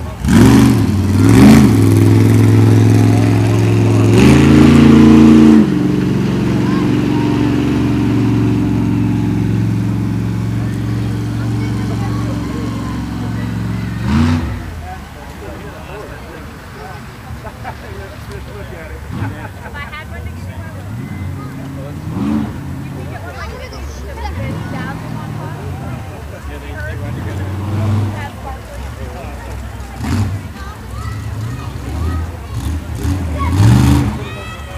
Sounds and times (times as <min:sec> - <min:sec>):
Truck: 0:00.0 - 0:34.7
Speech: 0:06.4 - 0:07.6, 0:10.4 - 0:34.7.